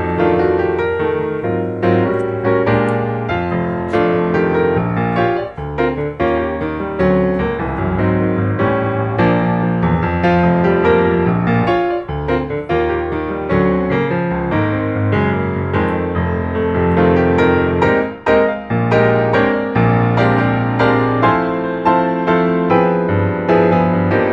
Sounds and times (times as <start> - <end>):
Music: 0.0 - 24.3.